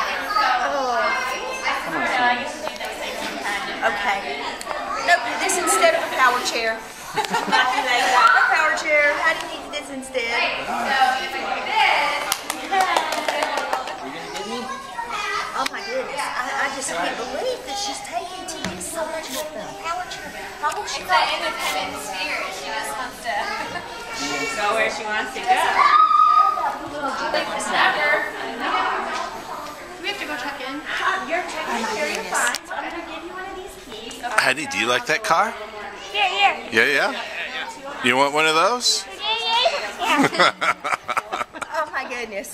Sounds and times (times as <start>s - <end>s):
Child speech, kid speaking: 0.0s - 6.6s, 7.9s - 9.8s, 14.0s - 28.0s, 35.8s - 38.0s, 39.0s - 40.3s
Female speech, woman speaking: 0.0s - 6.8s, 7.5s - 14.0s, 15.5s - 25.9s, 26.7s - 35.0s, 35.6s - 38.0s, 39.0s - 40.5s, 41.3s - 42.5s
Inside, large room or hall: 0.0s - 42.5s.